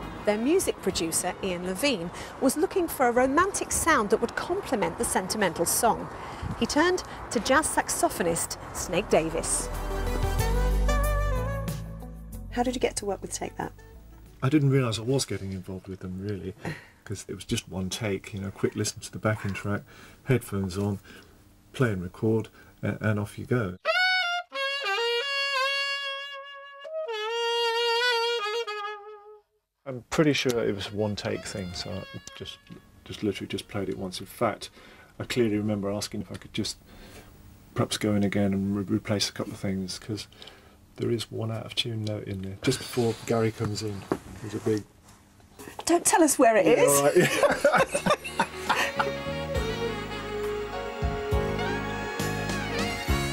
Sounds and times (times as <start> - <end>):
Saxophone: 9.6 - 12.2, 23.8 - 29.6, 30.8 - 33.9, 48.6 - 53.3
Speech: 14.4 - 21.0, 21.8 - 23.8, 29.9 - 36.8, 37.8 - 40.3, 41.0 - 44.9.